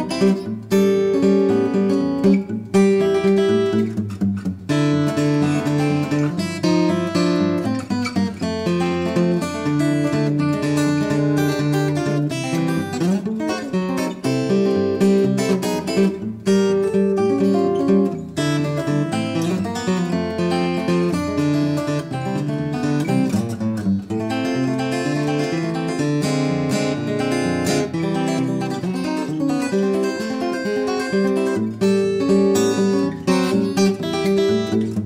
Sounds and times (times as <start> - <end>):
Acoustic guitar: 0.0 - 35.0
Strum: 0.0 - 35.0.